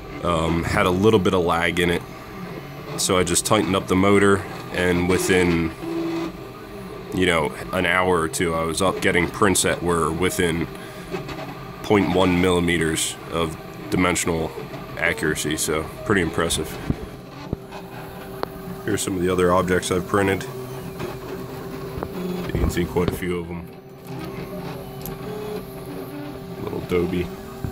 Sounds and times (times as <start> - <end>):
Printer: 0.0 - 27.7
Speech: 0.2 - 2.0, 3.0 - 5.8, 7.1 - 10.7, 11.8 - 16.9, 18.8 - 20.6, 22.4 - 23.7, 26.6 - 27.3.